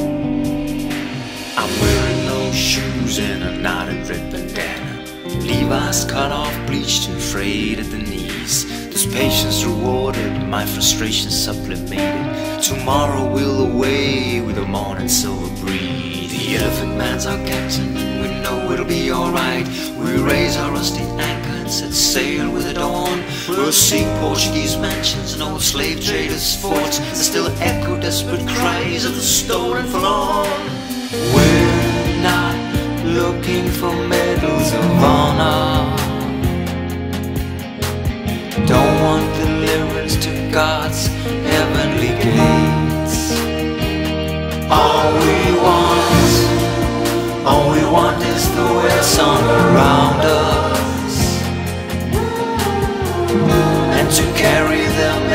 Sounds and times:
Music: 0.0 - 55.3.

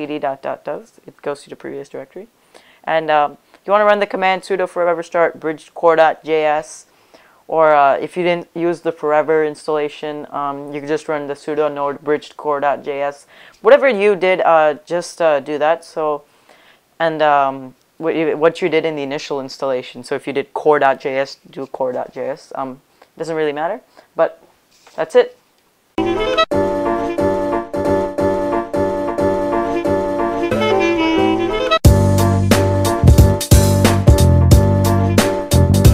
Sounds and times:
Speech: 0.0 - 2.3, 2.9 - 6.9, 7.5 - 16.3, 17.0 - 25.4
Wind instrument, woodwind instrument: 29.7 - 31.8.

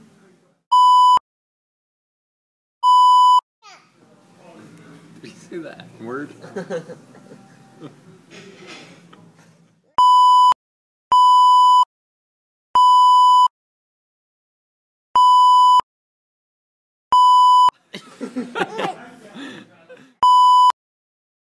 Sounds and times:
Beep, bleep: 0.8 - 1.2, 2.8 - 3.4, 10.0 - 10.6, 11.2 - 11.9, 12.8 - 13.5, 15.2 - 15.8, 17.2 - 17.7, 20.2 - 20.8
Child speech, kid speaking: 3.6 - 4.0
Giggle: 6.4 - 8.1, 17.8 - 20.2.

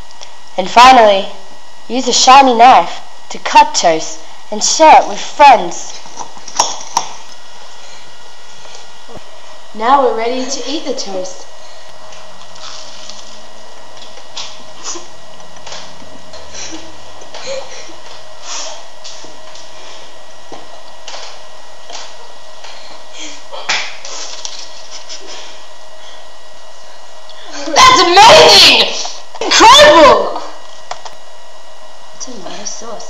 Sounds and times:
Speech: 0.6 - 6.0, 9.8 - 11.4, 27.6 - 30.5.

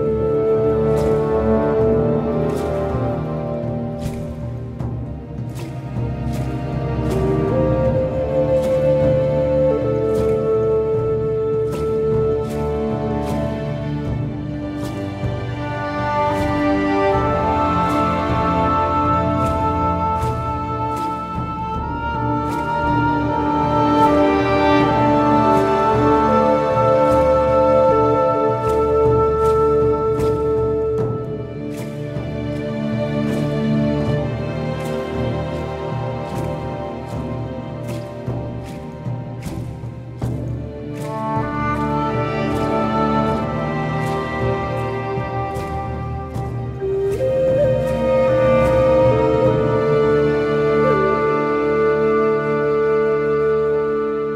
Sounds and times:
Music: 0.0 - 54.3.

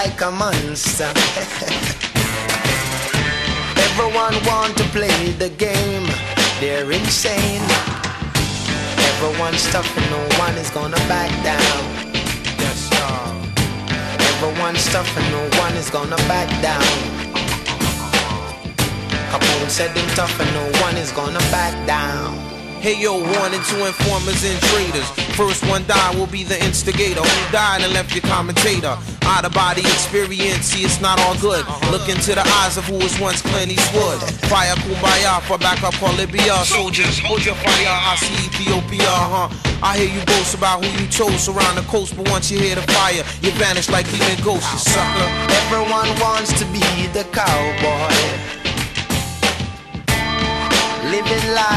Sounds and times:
Hip hop music: 0.0 - 51.7.

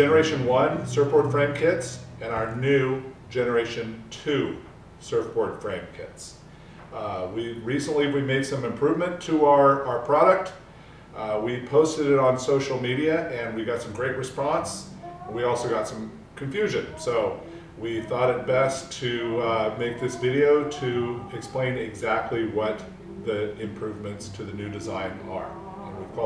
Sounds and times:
Speech: 0.0 - 10.6, 11.2 - 26.2.

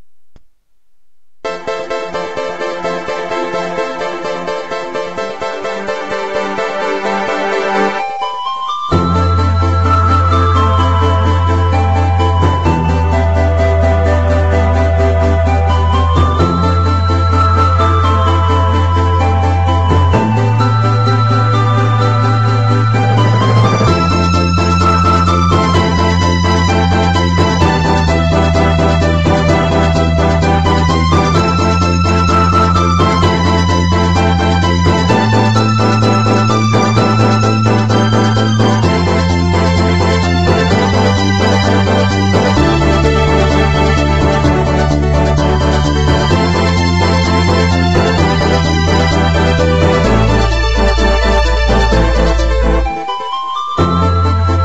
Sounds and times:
Rhythm and blues: 0.0 - 54.6.

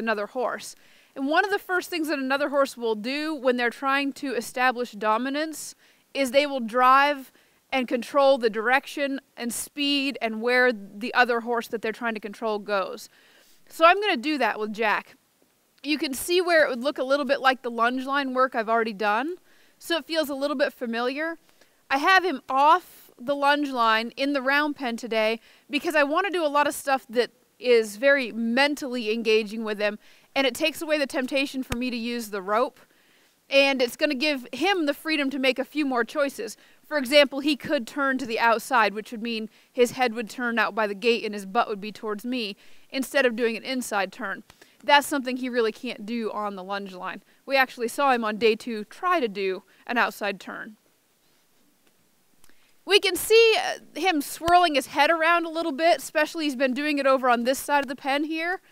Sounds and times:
Speech: 0.0 - 13.1, 13.7 - 15.2, 15.8 - 32.8, 33.5 - 50.8, 52.9 - 58.6.

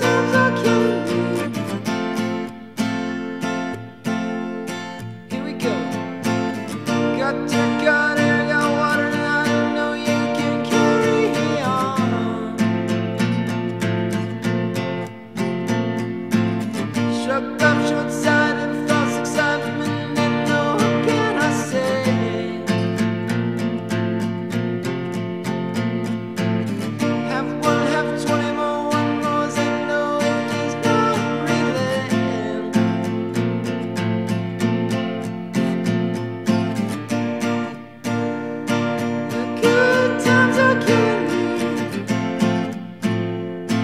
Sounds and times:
Music: 0.0 - 43.8.

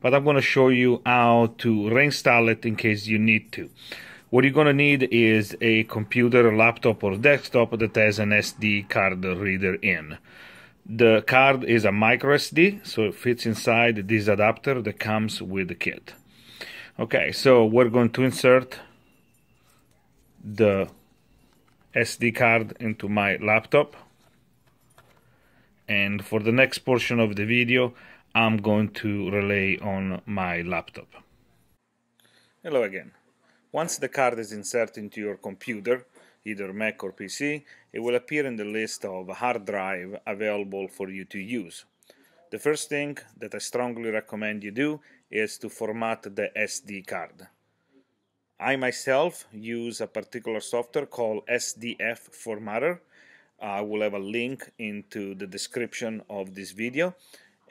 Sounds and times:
Speech: 0.0 - 10.2, 10.9 - 16.2, 17.0 - 19.0, 20.4 - 21.0, 21.9 - 24.1, 25.9 - 31.3, 32.6 - 41.9, 42.5 - 47.6, 48.6 - 53.0, 53.6 - 57.2.

